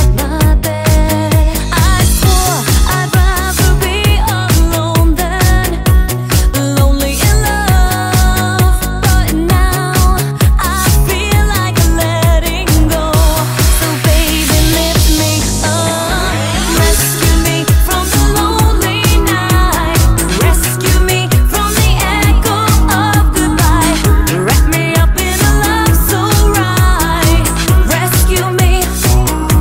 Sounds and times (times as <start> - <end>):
Music: 0.0 - 29.6.